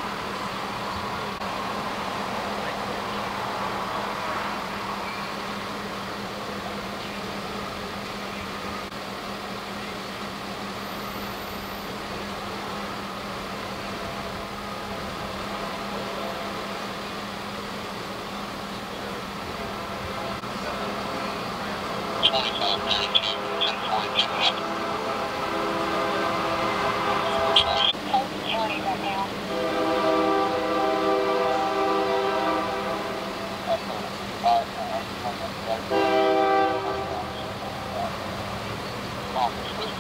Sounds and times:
Train horn: 20.2 - 28.0, 29.5 - 33.5, 35.9 - 37.6.

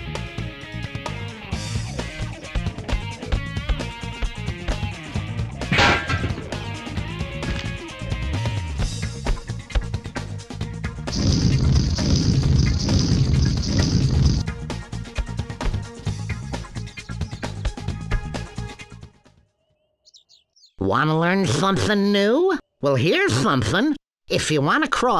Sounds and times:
Music: 0.0 - 19.8.

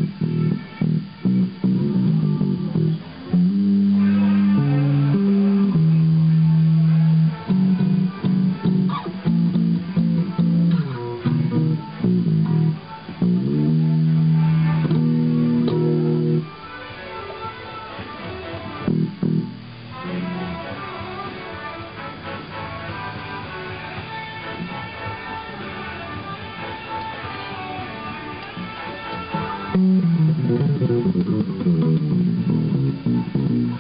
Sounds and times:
Bass guitar: 0.0 - 33.8.

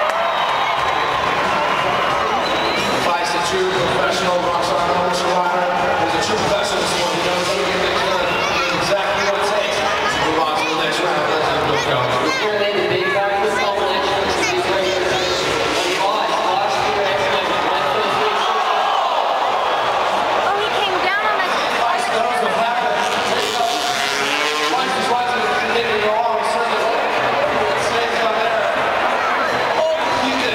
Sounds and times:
Speech: 3.0 - 18.8, 20.5 - 28.8, 29.4 - 30.5.

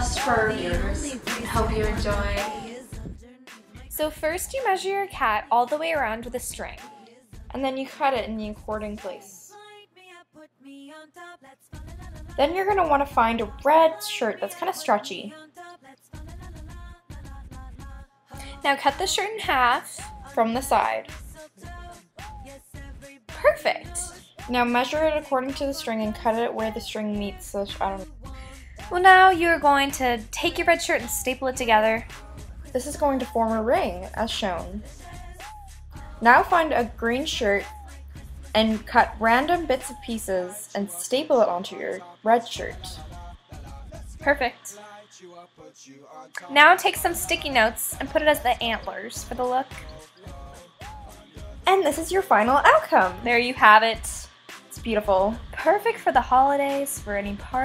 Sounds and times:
Speech: 0.0 - 2.8, 4.0 - 6.8, 7.5 - 9.5, 12.4 - 15.4, 18.5 - 21.1, 23.4 - 28.1, 28.9 - 32.1, 32.8 - 34.8, 36.2 - 37.7, 38.6 - 43.0, 44.2 - 44.8, 46.4 - 49.8, 51.7 - 57.6
Music: 0.0 - 57.6.

